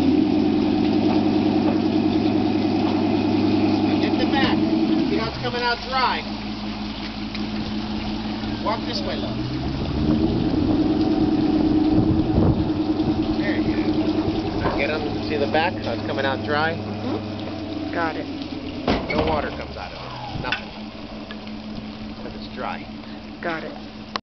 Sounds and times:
Stream: 0:00.0 - 0:24.2
Vehicle: 0:00.0 - 0:24.2
Speech: 0:03.9 - 0:06.3, 0:08.6 - 0:09.4, 0:14.6 - 0:16.8, 0:19.1 - 0:20.5, 0:22.2 - 0:23.8.

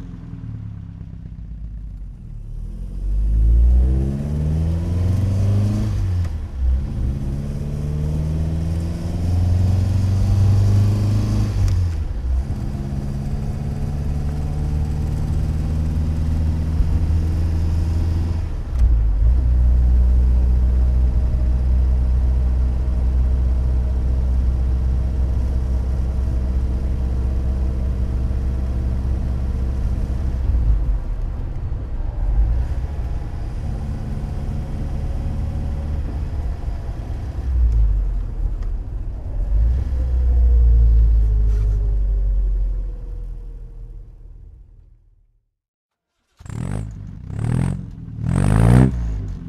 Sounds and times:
Car: 0:00.0 - 0:49.4.

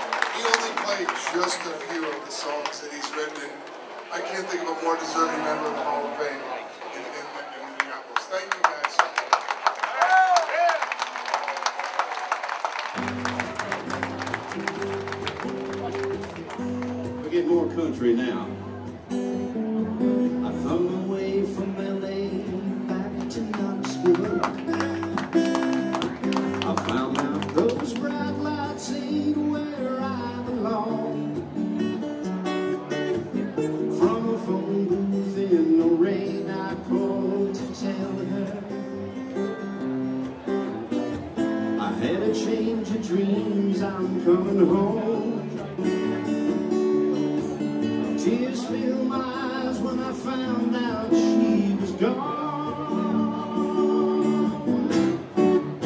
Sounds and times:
Speech: 0:00.3 - 0:09.4, 0:17.2 - 0:19.0
Music: 0:12.9 - 0:55.8.

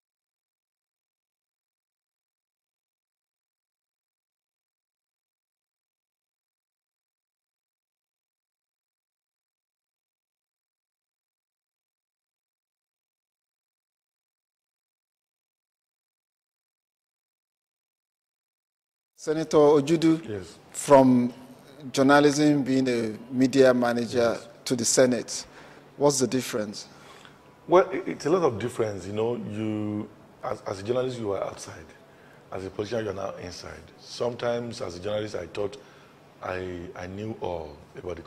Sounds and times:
Speech: 0:19.2 - 0:26.9, 0:27.7 - 0:35.8, 0:36.4 - 0:38.2.

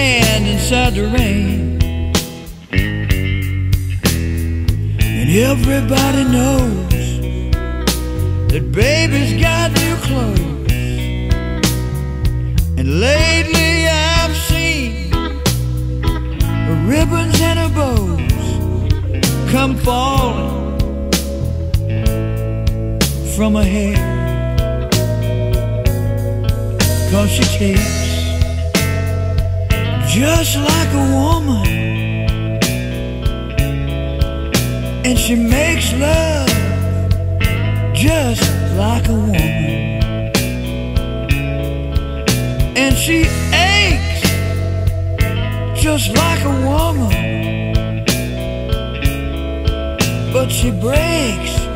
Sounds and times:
Music: 0:00.0 - 0:51.7.

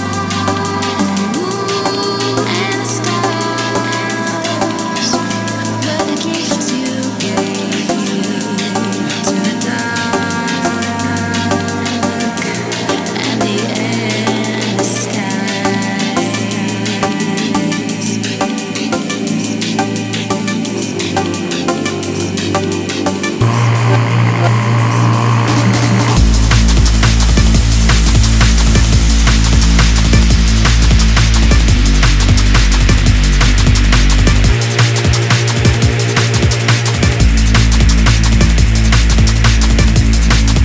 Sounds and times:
Drum and bass: 0:00.0 - 0:40.6.

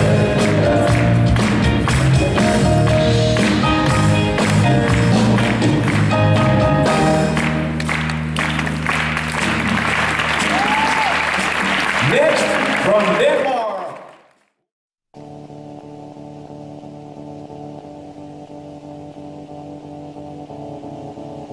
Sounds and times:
Music: 0:00.0 - 0:13.4, 0:15.2 - 0:21.5
Inside, large room or hall: 0:00.0 - 0:14.4
Speech: 0:12.0 - 0:14.1.

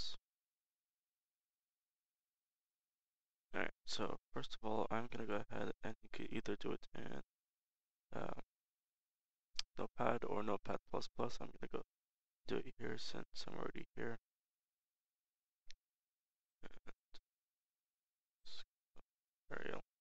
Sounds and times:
Speech: 0:00.0 - 0:00.2, 0:03.6 - 0:07.2, 0:08.1 - 0:08.5, 0:09.6 - 0:11.9, 0:12.5 - 0:14.2, 0:16.6 - 0:17.2, 0:18.5 - 0:18.7, 0:19.5 - 0:20.0.

